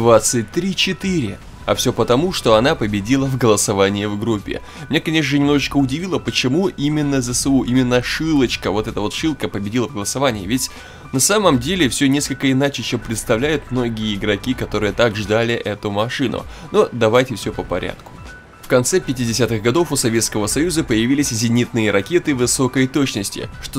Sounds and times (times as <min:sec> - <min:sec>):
Speech: 0:00.0 - 0:18.0, 0:18.7 - 0:23.7
Music: 0:00.0 - 0:23.7.